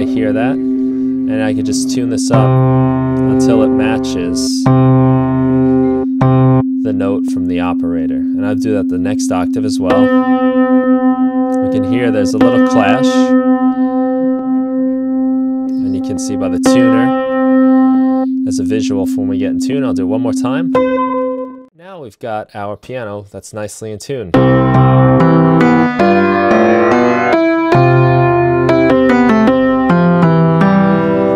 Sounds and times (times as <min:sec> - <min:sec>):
Effects unit: 0:00.0 - 0:21.7, 0:24.4 - 0:31.3.